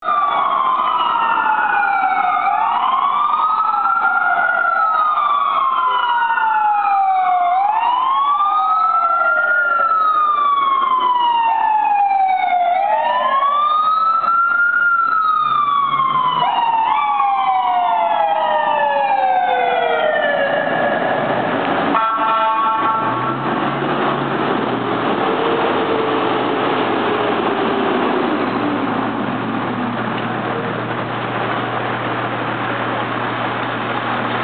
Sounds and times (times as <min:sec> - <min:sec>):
Siren: 0:00.0 - 0:29.6
Emergency vehicle: 0:00.0 - 0:34.4.